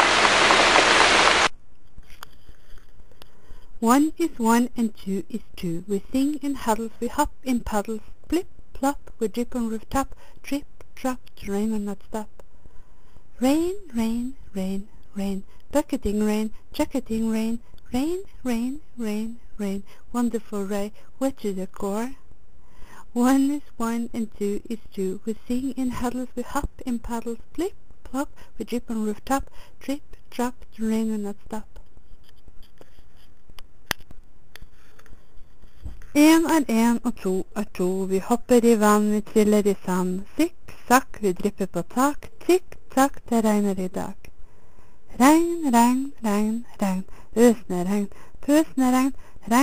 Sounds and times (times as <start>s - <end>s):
Speech: 3.8s - 12.3s, 13.4s - 22.2s, 23.1s - 31.7s, 36.2s - 44.3s, 45.2s - 49.6s.